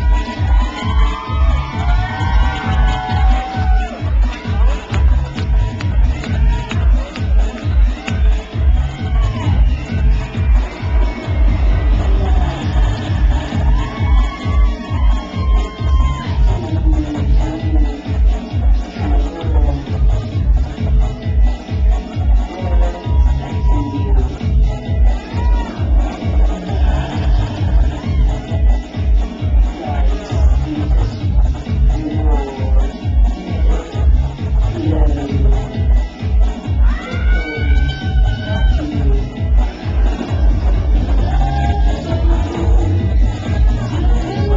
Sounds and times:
Music: 0.0s - 44.5s.

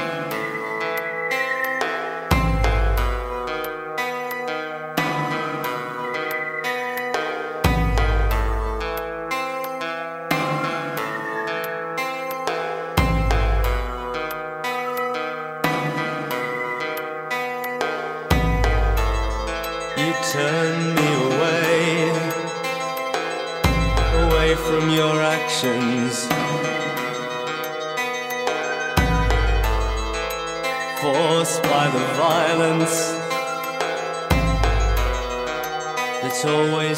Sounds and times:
Music: 0.0s - 36.9s.

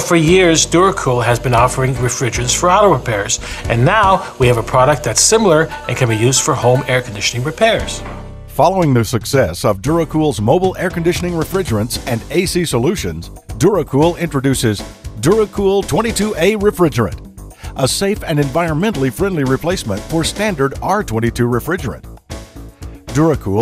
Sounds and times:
Speech: 0.0s - 8.0s, 8.6s - 17.2s, 17.8s - 22.0s, 23.1s - 23.6s
Music: 0.0s - 23.6s.

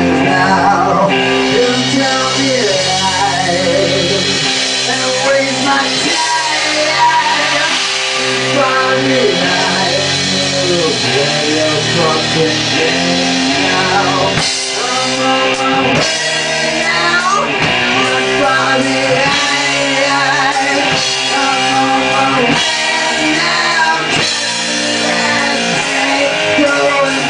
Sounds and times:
Music: 0.0s - 27.2s.

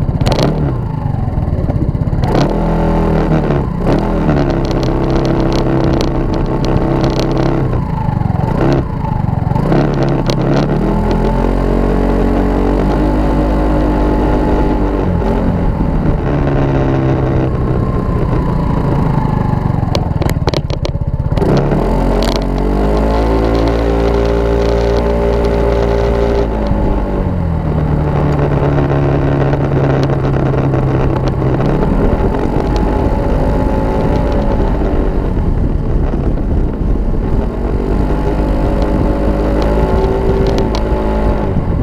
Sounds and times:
Vehicle: 0.0s - 41.8s
Accelerating, revving, vroom: 0.2s - 1.0s, 2.2s - 36.2s, 37.0s - 41.8s.

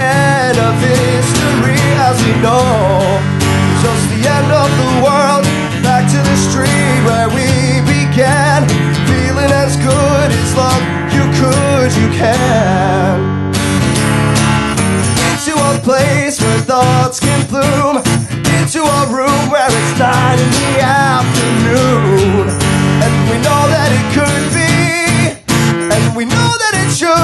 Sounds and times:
Music: 0.0s - 27.2s.

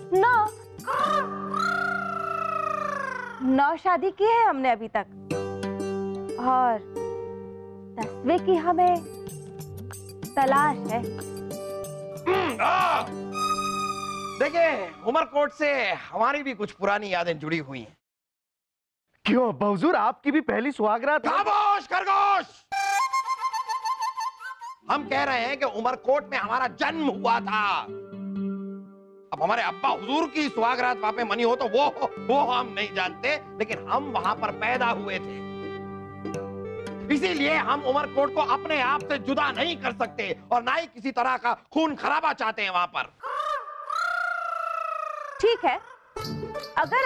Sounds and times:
Music: 0.0s - 3.5s, 4.1s - 16.0s, 22.7s - 41.0s, 46.2s - 47.0s
Speech: 19.2s - 22.6s.

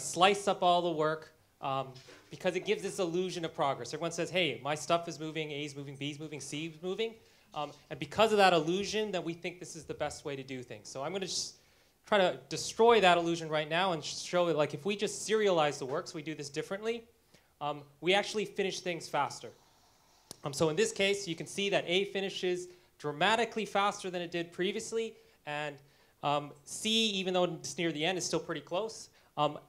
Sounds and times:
Speech: 0.0s - 19.6s, 20.4s - 29.6s.

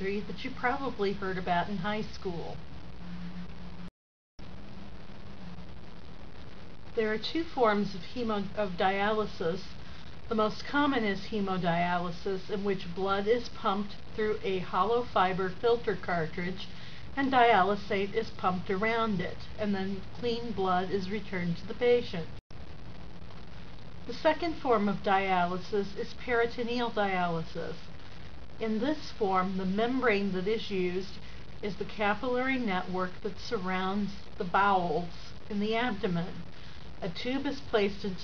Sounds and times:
Speech: 0.0s - 2.6s, 7.0s - 22.3s, 24.1s - 27.8s, 28.6s - 38.2s.

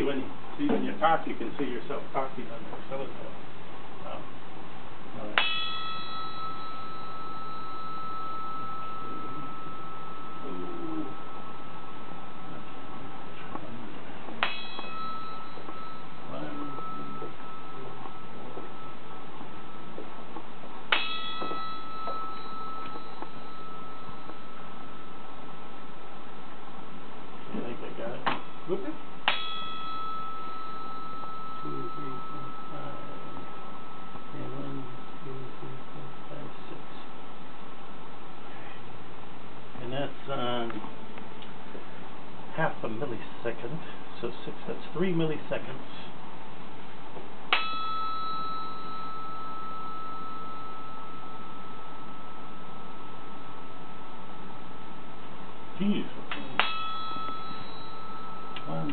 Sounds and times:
Speech: 0.0s - 3.4s, 4.0s - 4.3s, 5.2s - 5.4s, 10.4s - 11.2s, 16.3s - 18.6s, 27.5s - 29.0s, 31.6s - 33.5s, 34.3s - 37.1s, 39.8s - 40.9s, 42.5s - 46.2s, 55.8s - 56.3s, 58.7s - 58.9s.

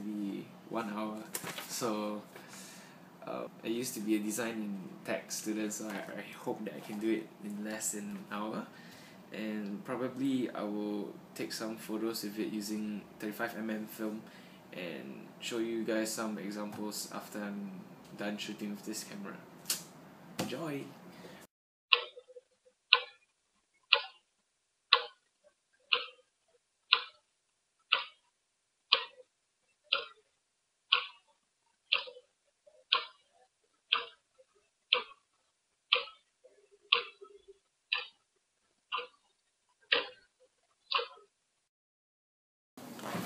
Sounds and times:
Speech: 0.0s - 2.3s, 3.2s - 8.7s, 9.3s - 14.2s, 14.8s - 19.4s, 20.4s - 21.0s.

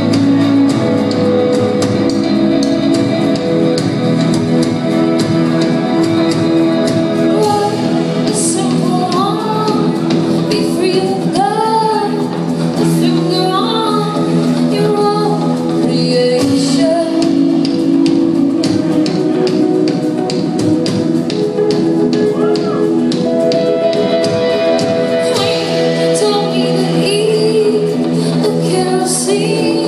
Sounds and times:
Independent music: 0.0s - 29.8s.

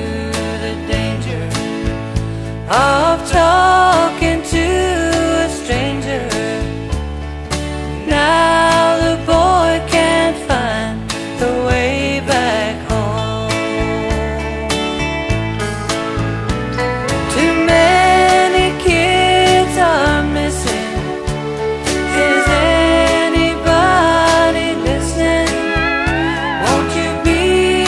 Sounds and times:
Music: 0.0s - 27.8s.

